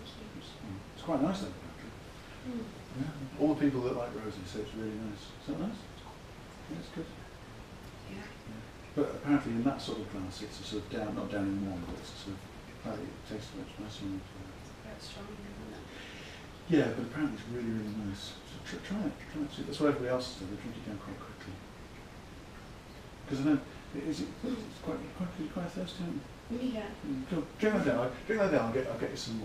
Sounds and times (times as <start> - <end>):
Speech: 0.0 - 5.9, 6.7 - 7.2, 8.1 - 15.8, 16.7 - 21.6, 23.3 - 29.4.